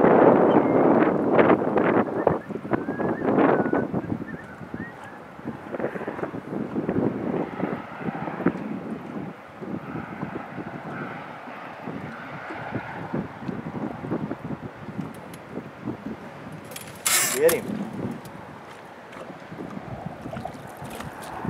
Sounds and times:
Boat, Water vehicle: 0.0 - 21.5
Outside, rural or natural: 0.0 - 21.5.

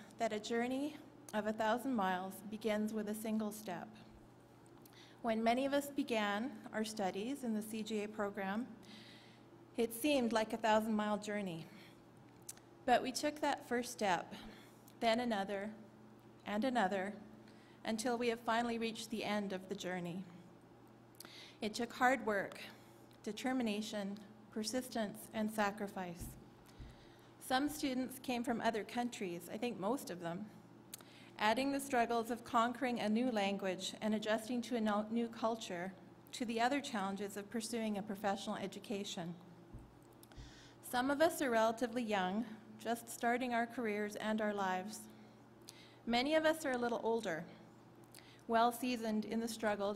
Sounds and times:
Narration, monologue: 0.0 - 49.9
Female speech, woman speaking: 0.2 - 4.0, 5.3 - 8.7, 9.8 - 11.7, 12.9 - 14.4, 15.0 - 15.8, 16.4 - 17.2, 17.9 - 20.3, 21.6 - 22.7, 23.3 - 26.4, 27.4 - 30.5, 31.4 - 39.4, 40.9 - 45.1, 46.1 - 47.5, 48.5 - 49.9.

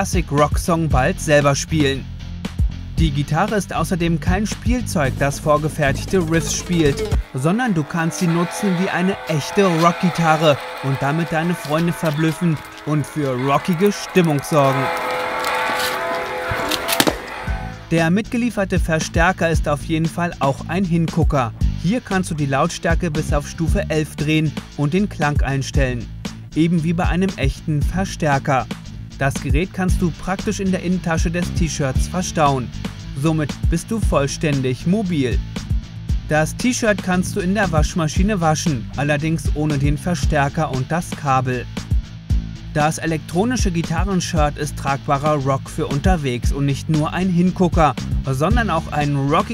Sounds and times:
Speech: 0.0 - 2.1, 3.0 - 14.9, 17.9 - 35.4, 36.3 - 41.7, 42.7 - 49.5
Strum: 5.0 - 18.0.

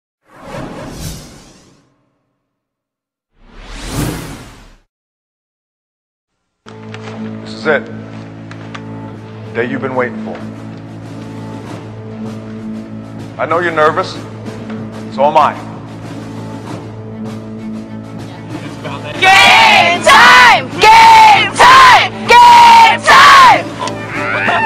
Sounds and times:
Sound effect: 0.2 - 2.7, 3.3 - 4.9.

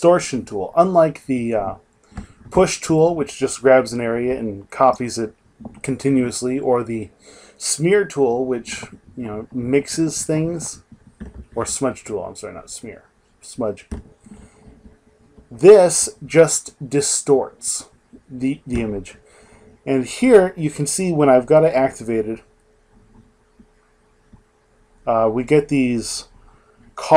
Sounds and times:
Speech: 0.0 - 1.8, 2.5 - 10.8, 11.6 - 14.0, 15.5 - 19.2, 19.9 - 22.4, 25.1 - 26.3.

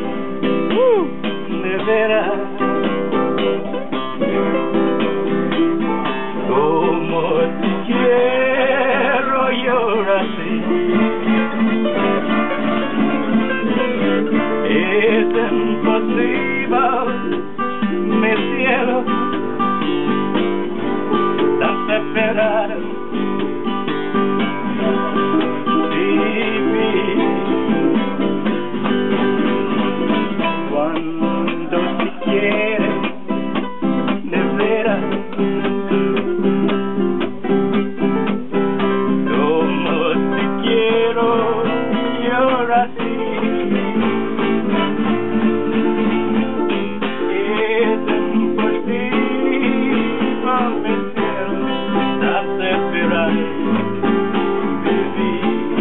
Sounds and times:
Flamenco: 0.0 - 55.8
Strum: 0.0 - 55.8.

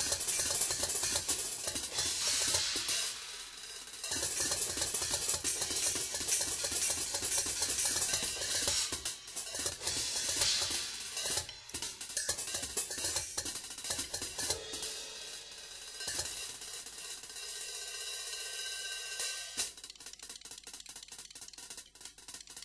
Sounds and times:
Drum kit: 0.0 - 22.6
Hi-hat: 0.0 - 22.6.

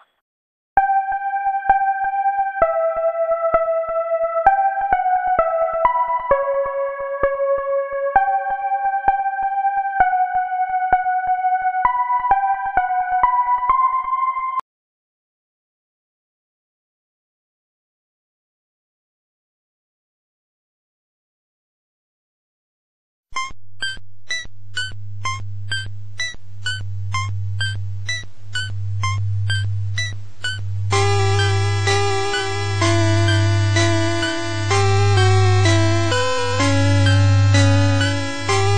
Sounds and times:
Middle Eastern music: 31.0 - 38.7.

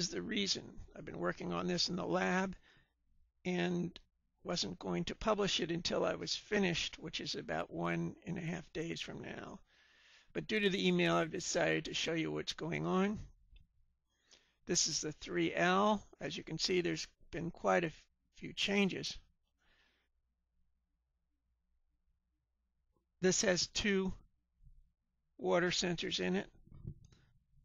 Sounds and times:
Speech: 0.0 - 2.6, 3.5 - 9.6, 10.3 - 13.4, 14.7 - 19.3, 23.2 - 24.3, 25.4 - 26.6.

